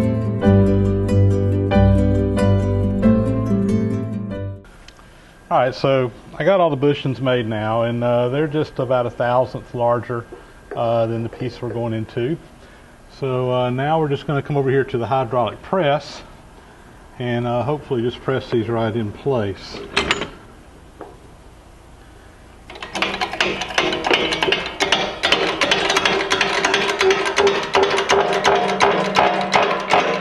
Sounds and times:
Tools: 19.8s - 20.4s, 22.7s - 30.2s.

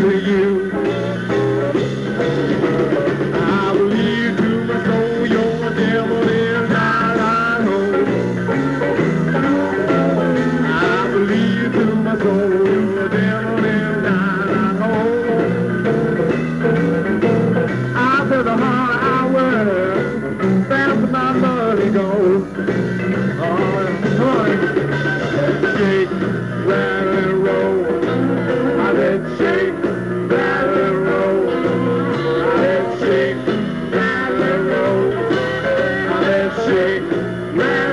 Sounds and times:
Music: 0.0s - 37.9s.

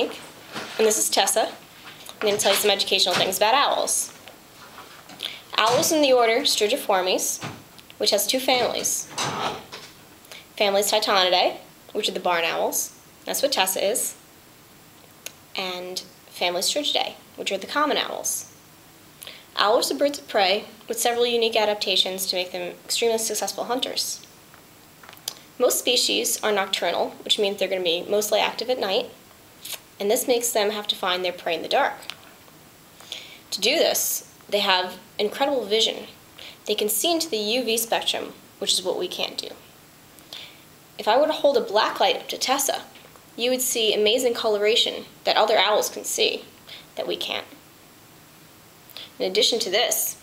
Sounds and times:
Speech: 0.0s - 4.2s, 5.5s - 9.1s, 10.6s - 14.2s, 15.6s - 18.5s, 19.6s - 24.2s, 25.6s - 32.1s, 33.5s - 39.7s, 41.0s - 47.6s, 49.2s - 50.2s.

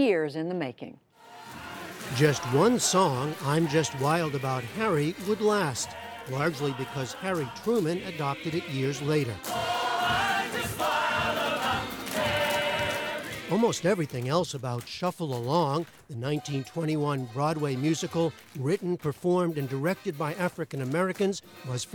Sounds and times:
Speech: 0.0s - 1.0s, 2.1s - 9.4s, 13.5s - 21.9s
Music: 1.2s - 21.9s.

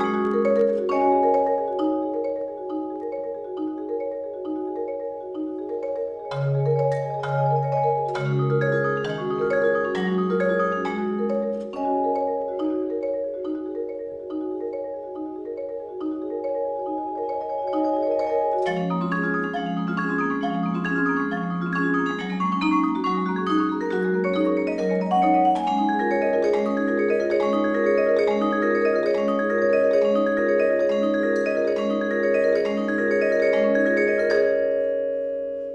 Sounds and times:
Percussion: 0.0s - 35.7s.

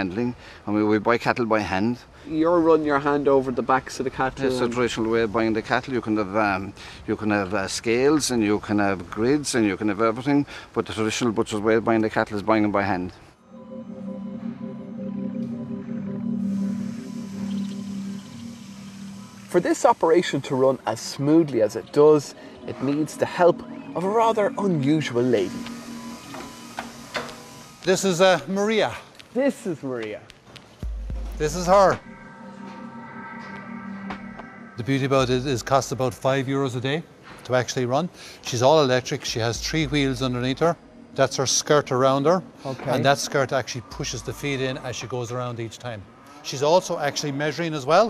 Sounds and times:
Music: 13.4s - 28.4s, 30.8s - 36.6s, 38.9s - 45.3s.

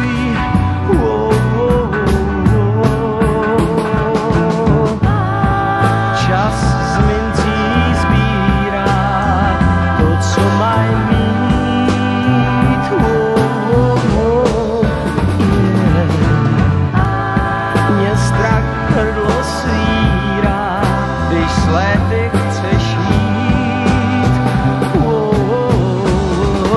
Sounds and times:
Music: 0.0s - 26.7s.

